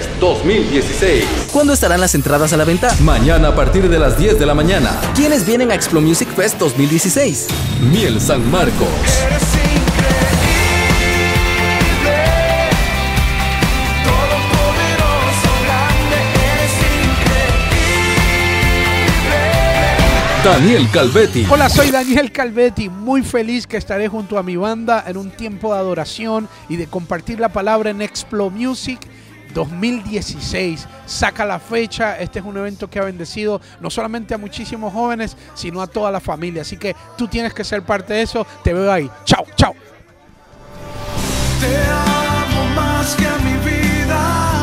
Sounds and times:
Speech: 0.0 - 9.3, 20.4 - 40.0
Music: 0.0 - 44.6.

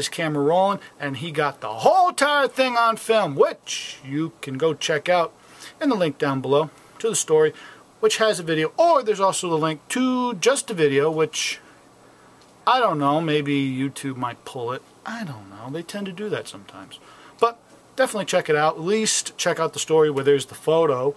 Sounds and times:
Speech: 0.0 - 11.6, 12.7 - 21.1.

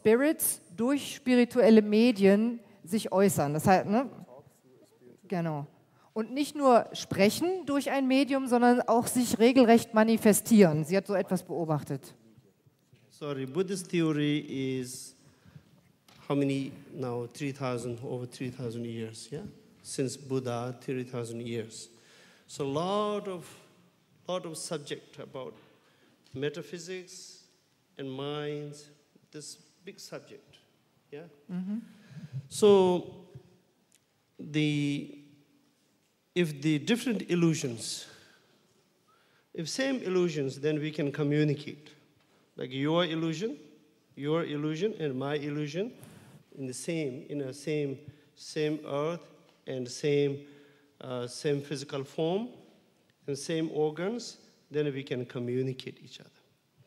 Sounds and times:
Speech: 0.0 - 15.2, 16.2 - 21.9, 22.5 - 23.7, 24.3 - 25.6, 26.3 - 30.6, 32.5 - 33.2, 34.4 - 35.2, 36.4 - 38.1, 39.6 - 42.0, 42.6 - 46.0, 46.6 - 50.4, 51.0 - 52.6, 53.3 - 56.4.

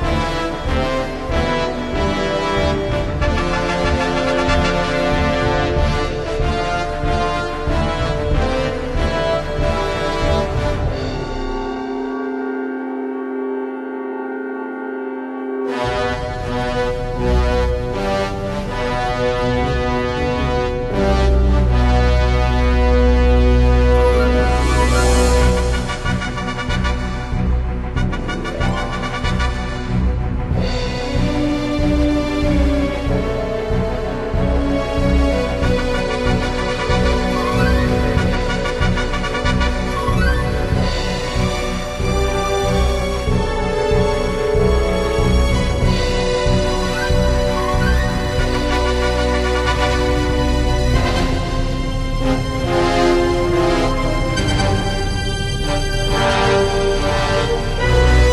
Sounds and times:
Music: 0.0 - 58.3.

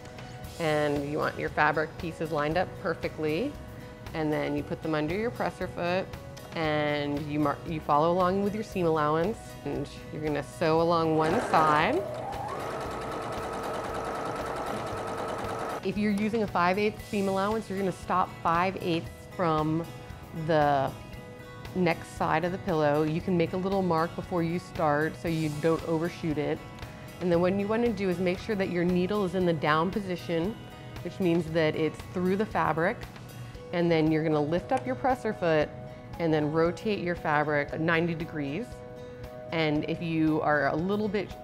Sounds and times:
Speech: 0.6 - 3.5, 15.9 - 19.8, 39.5 - 41.4
Sewing machine: 11.2 - 15.8.

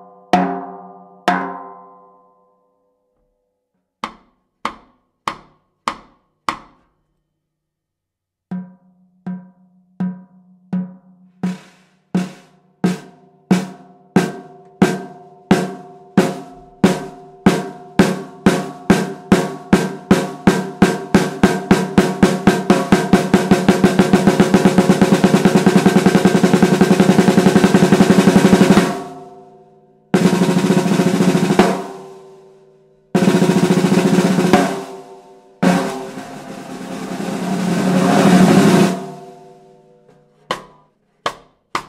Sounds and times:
Drum: 8.5 - 29.4, 30.2 - 32.3, 33.2 - 39.8.

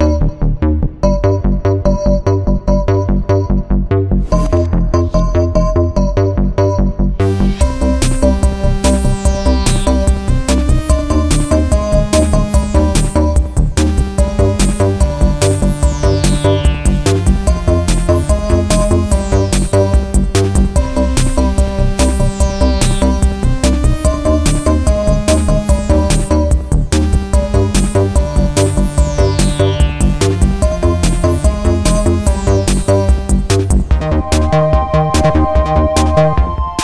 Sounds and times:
Electronica: 0.0 - 36.8.

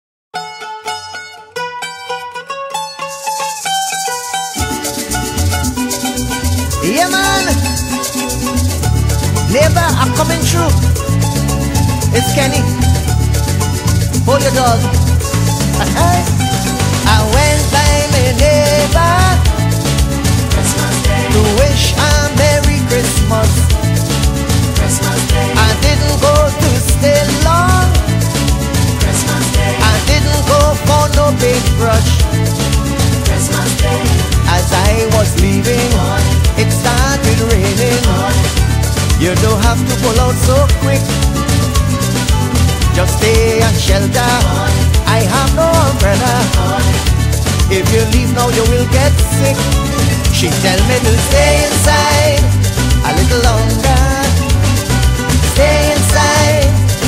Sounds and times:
Mandolin: 0.3 - 57.0
Salsa music: 0.4 - 57.0.

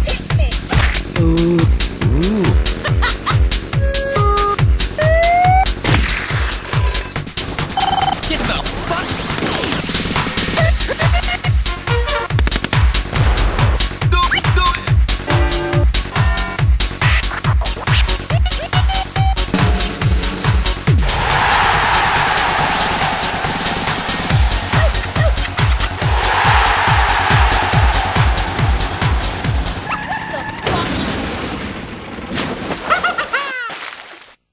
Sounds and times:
Music: 0.0 - 29.9.

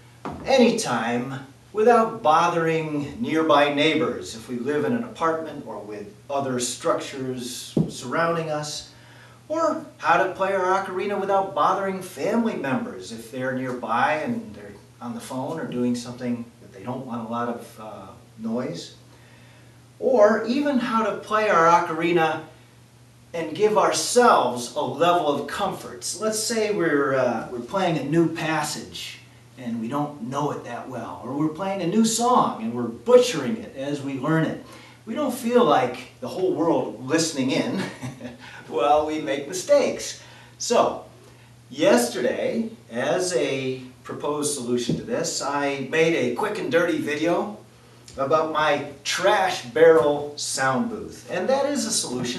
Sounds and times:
Speech: 0.3 - 8.9, 9.5 - 19.0, 20.0 - 22.5, 23.3 - 41.1, 41.7 - 52.3.

